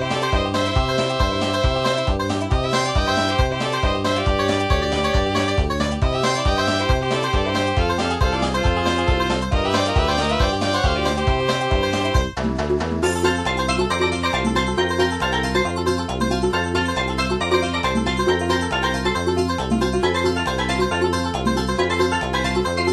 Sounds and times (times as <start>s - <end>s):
Video game music: 0.0s - 22.9s.